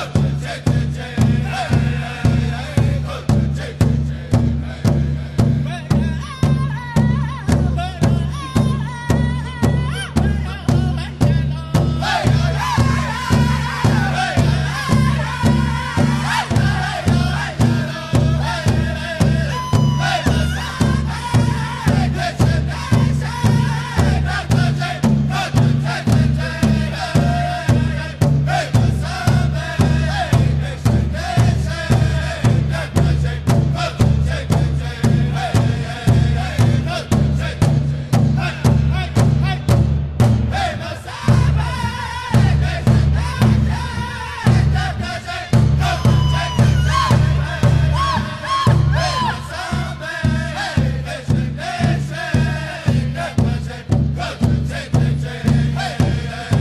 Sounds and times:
Music: 0:00.0 - 0:56.6.

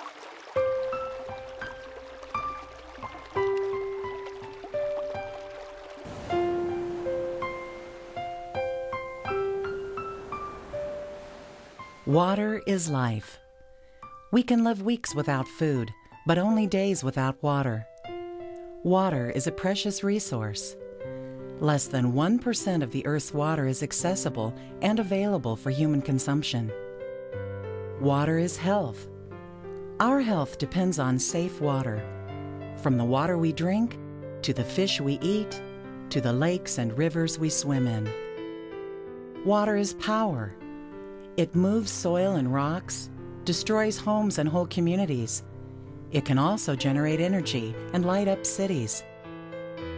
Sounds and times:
Music: 0:00.5 - 0:49.9
Speech: 0:12.1 - 0:13.4, 0:14.3 - 0:17.9, 0:18.8 - 0:20.8, 0:21.6 - 0:26.8, 0:28.0 - 0:29.1, 0:30.0 - 0:32.0, 0:32.8 - 0:38.1, 0:39.4 - 0:40.6, 0:41.4 - 0:45.4, 0:46.2 - 0:49.0.

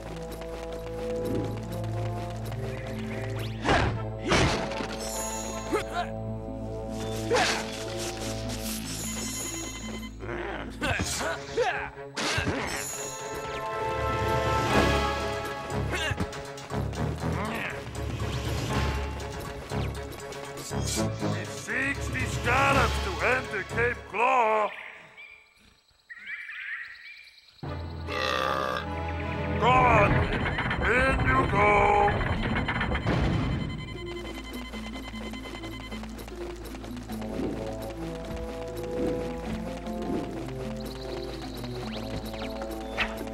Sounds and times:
Music: 0:00.0 - 0:24.6, 0:27.6 - 0:43.3.

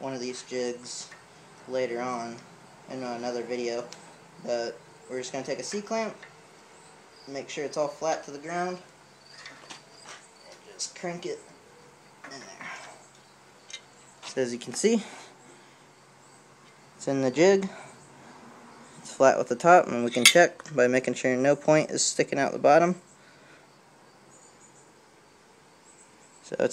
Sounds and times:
Speech: 0:00.0 - 0:01.1, 0:01.7 - 0:06.2, 0:07.3 - 0:08.9, 0:10.5 - 0:11.4, 0:12.3 - 0:12.8, 0:14.3 - 0:15.2, 0:17.0 - 0:17.8, 0:19.0 - 0:23.0, 0:26.4 - 0:26.7.

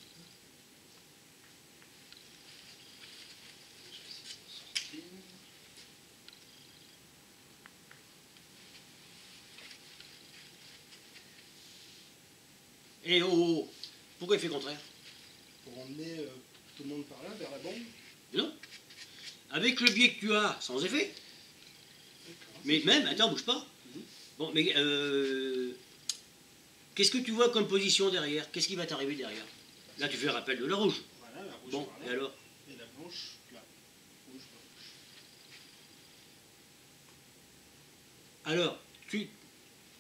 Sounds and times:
Speech: 0:15.7 - 0:18.6, 0:27.0 - 0:33.7.

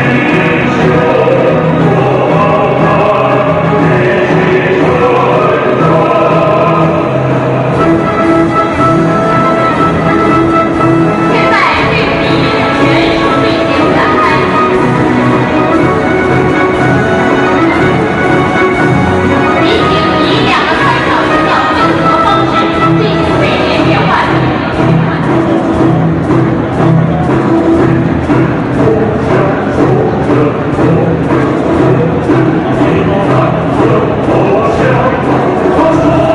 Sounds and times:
Music: 0:00.0 - 0:36.3
Speech: 0:11.3 - 0:14.6, 0:19.5 - 0:25.5.

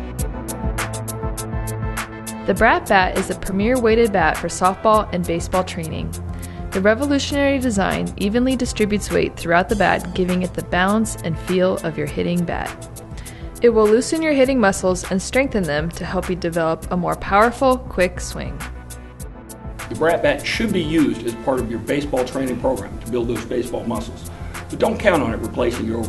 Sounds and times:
Music: 0:00.0 - 0:26.0
Speech: 0:02.5 - 0:06.0, 0:06.8 - 0:12.6, 0:13.6 - 0:18.6, 0:19.9 - 0:26.0.

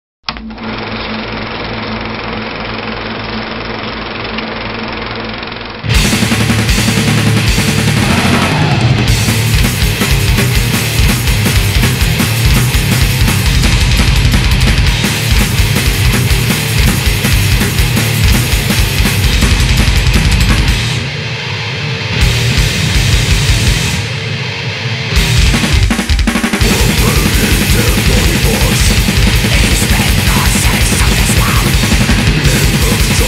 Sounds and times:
Music: 0:05.8 - 0:33.2.

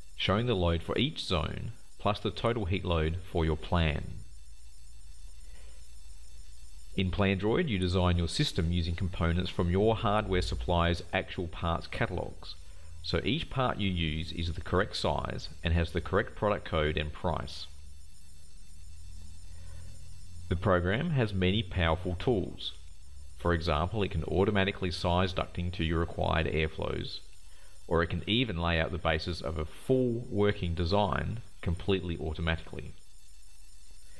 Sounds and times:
Speech: 0:00.2 - 0:04.3, 0:07.0 - 0:17.8, 0:20.5 - 0:22.8, 0:23.4 - 0:27.3, 0:27.9 - 0:33.0.

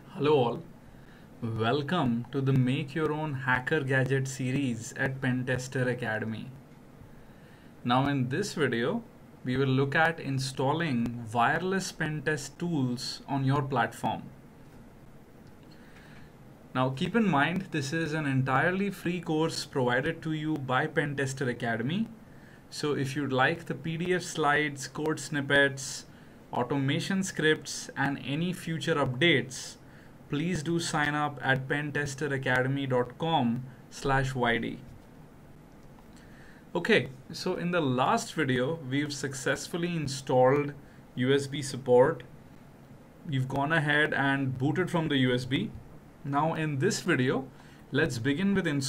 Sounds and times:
Speech: 0:00.0 - 0:00.7, 0:01.4 - 0:06.6, 0:07.8 - 0:14.3, 0:16.7 - 0:34.9, 0:36.8 - 0:42.3, 0:43.2 - 0:48.8.

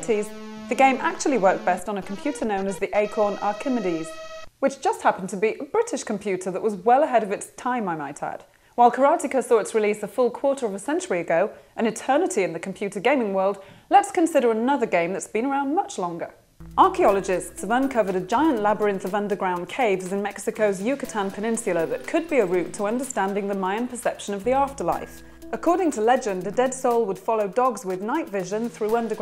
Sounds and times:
Music: 0:00.0 - 0:04.6, 0:16.6 - 0:29.2
Speech: 0:00.0 - 0:29.2.

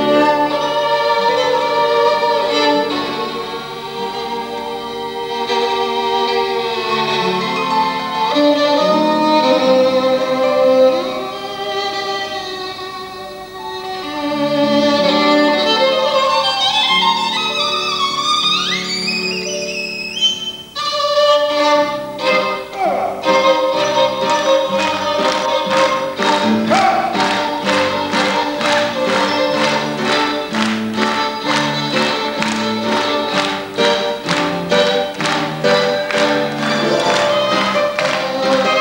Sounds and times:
Violin, fiddle: 0:00.0 - 0:38.8.

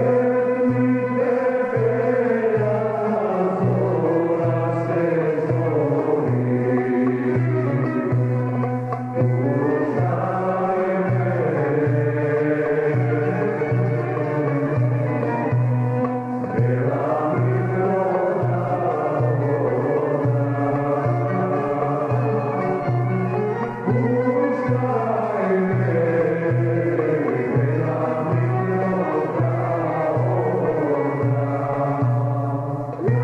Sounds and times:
Music: 0:00.0 - 0:33.2.

